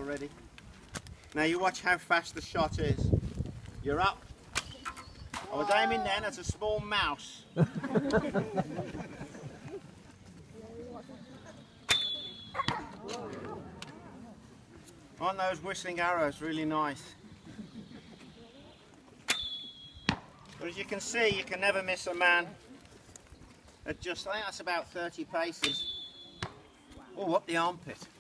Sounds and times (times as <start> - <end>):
Arrow: 4.6 - 5.6, 11.9 - 13.2, 19.3 - 20.3, 25.6 - 26.6.